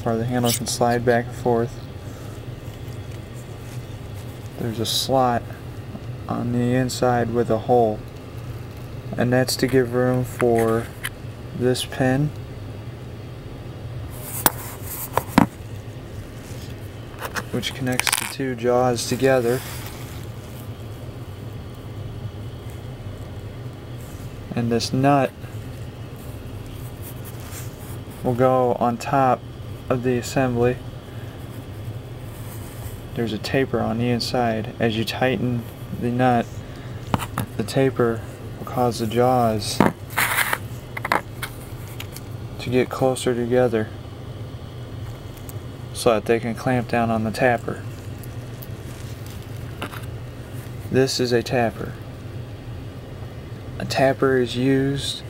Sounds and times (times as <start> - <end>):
Speech: 0.0 - 1.8, 4.6 - 5.6, 6.3 - 8.0, 9.1 - 11.0, 11.6 - 12.4, 17.5 - 19.6, 24.5 - 25.4, 28.2 - 30.8, 33.2 - 36.5, 37.6 - 39.9, 42.6 - 44.0, 45.9 - 47.9, 50.9 - 52.0, 53.8 - 55.2.